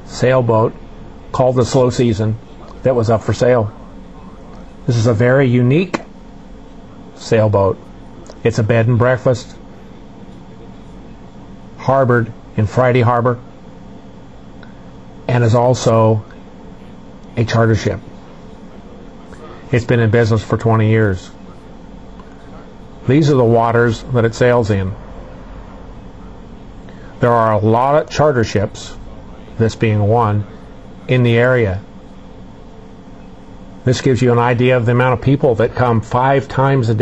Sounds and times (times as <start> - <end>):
Speech: 0.0 - 6.1, 6.7 - 13.5, 15.2 - 25.0, 27.2 - 31.9, 33.8 - 37.0.